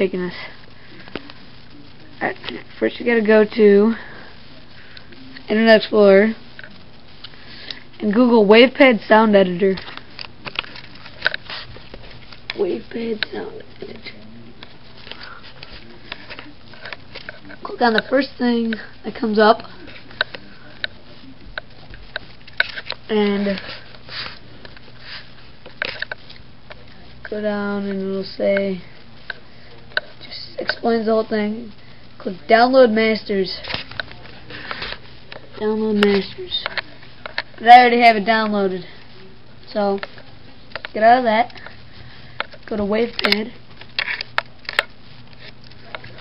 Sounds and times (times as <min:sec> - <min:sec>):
Speech: 0:02.1 - 0:04.1, 0:05.2 - 0:06.4, 0:08.0 - 0:09.8, 0:12.6 - 0:14.6, 0:17.6 - 0:21.5, 0:23.1 - 0:23.7, 0:26.9 - 0:28.9, 0:30.2 - 0:34.5, 0:35.6 - 0:37.0, 0:37.6 - 0:40.2, 0:40.9 - 0:41.6, 0:42.7 - 0:43.6.